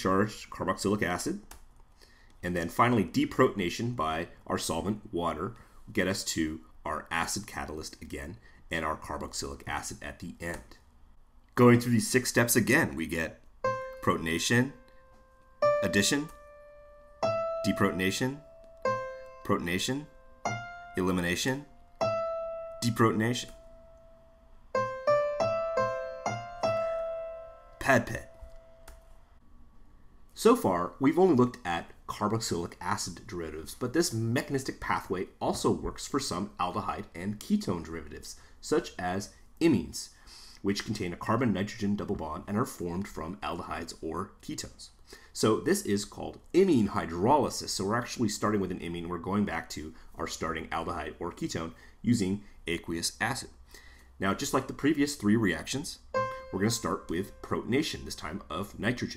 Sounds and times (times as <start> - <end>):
Speech: 0.0 - 1.5, 2.4 - 10.8, 11.6 - 13.4, 14.0 - 14.8, 15.8 - 16.4, 17.6 - 18.4, 19.4 - 20.1, 21.0 - 21.7, 22.8 - 23.6, 27.8 - 28.3, 30.4 - 53.6, 54.2 - 59.1
Electric piano: 13.6 - 14.2, 14.8 - 19.4, 20.1 - 21.0, 21.7 - 24.1, 24.7 - 28.8, 56.1 - 57.6.